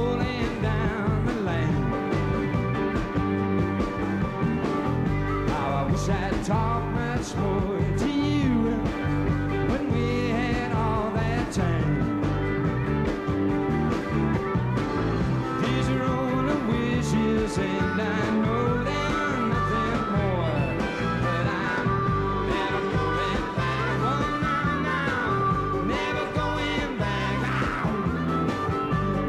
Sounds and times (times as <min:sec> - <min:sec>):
Country: 0:00.0 - 0:29.2.